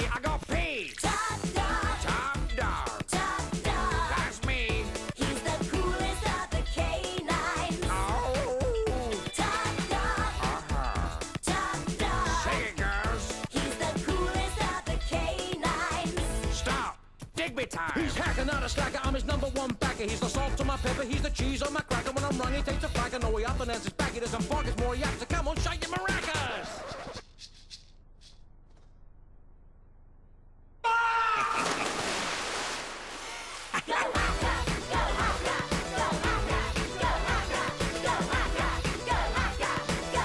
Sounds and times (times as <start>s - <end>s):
Music: 0.0s - 17.0s, 17.9s - 26.7s, 34.2s - 40.2s.